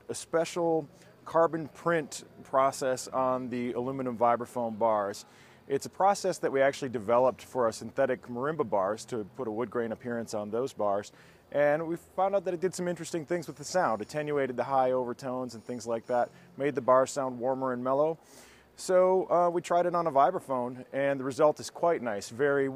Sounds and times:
Speech: 0.0 - 18.2, 18.8 - 22.7.

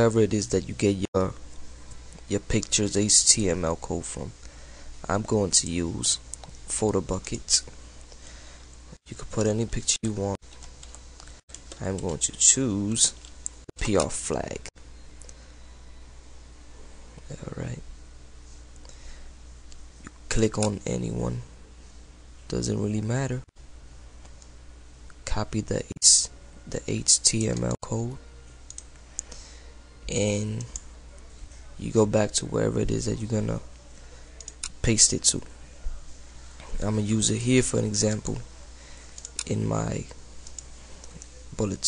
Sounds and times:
Speech: 0.0 - 1.4, 2.3 - 4.4, 5.0 - 7.7, 9.0 - 10.4, 11.8 - 13.2, 13.8 - 14.7, 17.2 - 17.9, 20.0 - 21.5, 22.5 - 23.5, 25.2 - 28.2, 30.1 - 38.7, 39.3 - 40.2, 41.1 - 41.8.

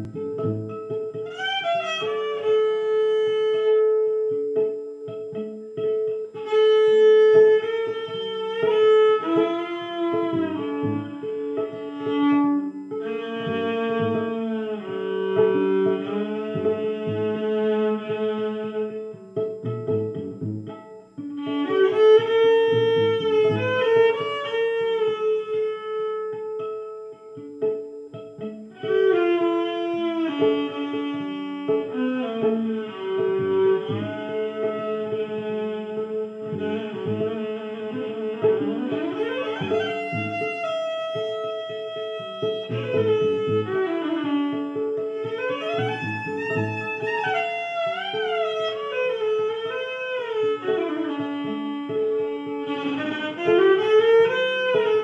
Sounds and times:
Violin, fiddle: 0.0 - 55.0.

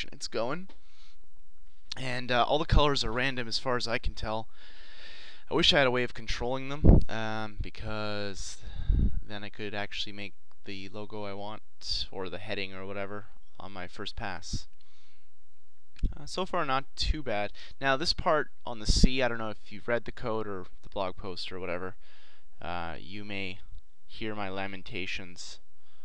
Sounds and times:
Speech: 0.0 - 0.7, 1.9 - 4.5, 5.5 - 14.7, 16.1 - 22.0, 22.6 - 25.6.

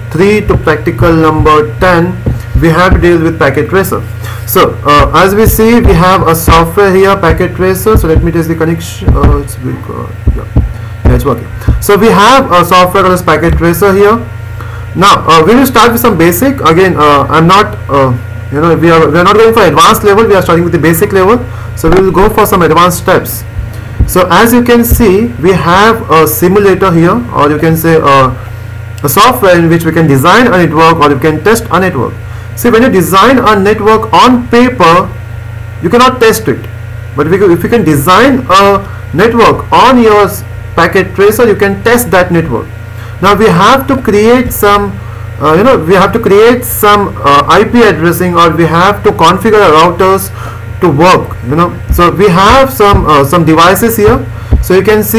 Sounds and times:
Speech: 0.1 - 14.3, 15.0 - 28.4, 29.0 - 35.2, 35.8 - 55.1.

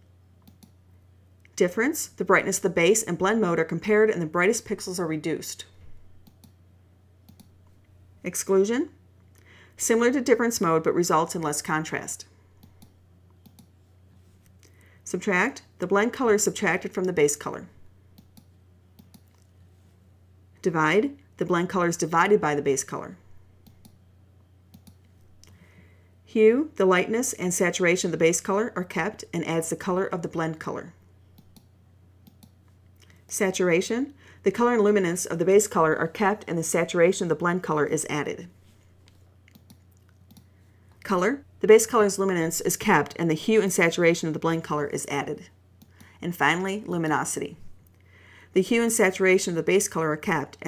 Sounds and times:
Clicking: 0.4 - 0.8, 6.2 - 6.6, 7.3 - 7.5, 12.6 - 13.7, 18.2 - 19.5, 23.6 - 24.0, 24.7 - 25.6, 31.4 - 33.2, 39.5 - 40.5
Speech: 1.5 - 5.7, 8.2 - 9.0, 9.8 - 12.3, 15.1 - 17.8, 20.6 - 23.2, 26.3 - 31.0, 33.3 - 38.6, 41.0 - 45.6, 46.2 - 47.6, 48.6 - 50.6.

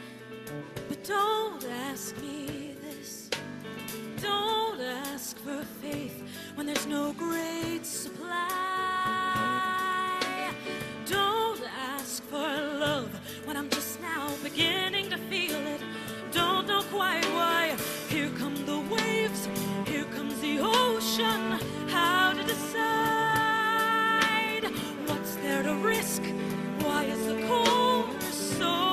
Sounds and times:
Music: 0.0 - 28.9
Female singing: 0.8 - 3.5, 4.1 - 28.9.

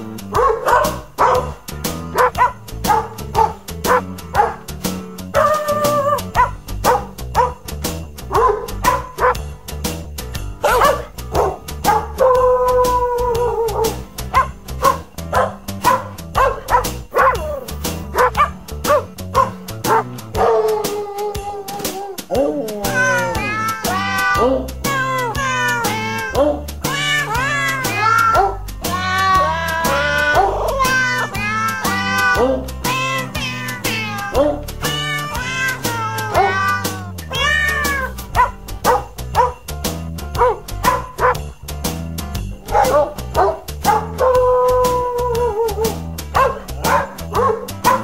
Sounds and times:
Jingle bell: 0.4 - 48.0.

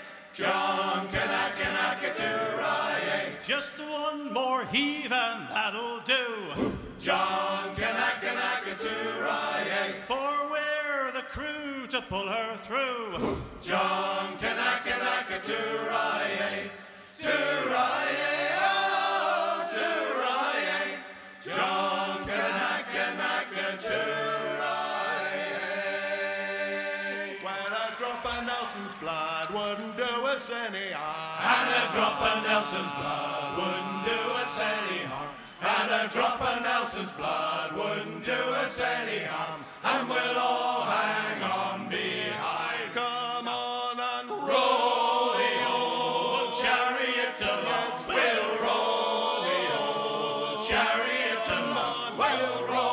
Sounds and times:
Singing: 0.0 - 52.9.

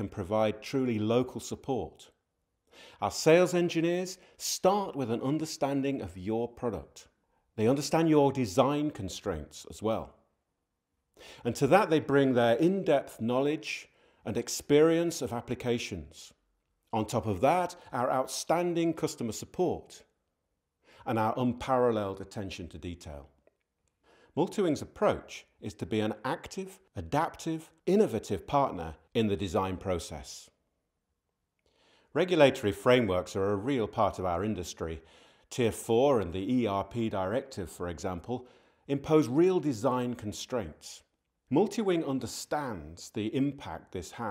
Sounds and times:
Speech: 0.0 - 2.2, 3.0 - 10.2, 11.4 - 20.1, 21.0 - 23.4, 24.3 - 30.6, 32.1 - 44.3.

